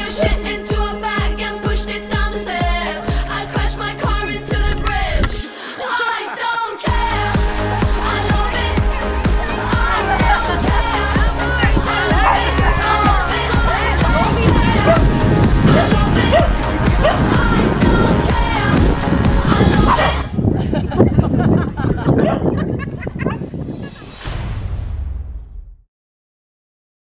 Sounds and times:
Music: 0.0 - 25.9.

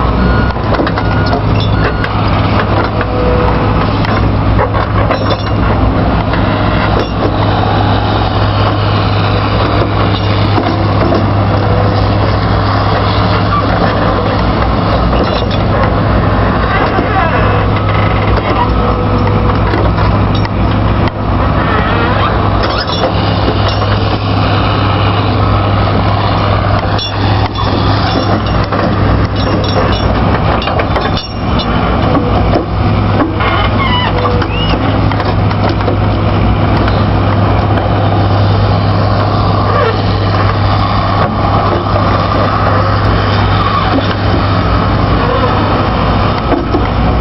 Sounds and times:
Speech: 16.7 - 17.7.

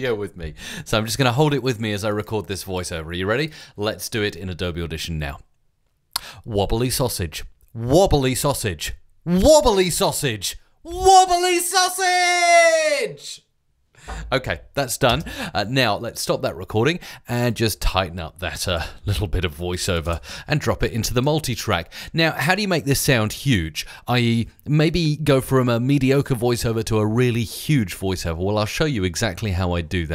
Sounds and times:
Speech: 0.0 - 5.5, 6.4 - 13.5, 14.3 - 30.1.

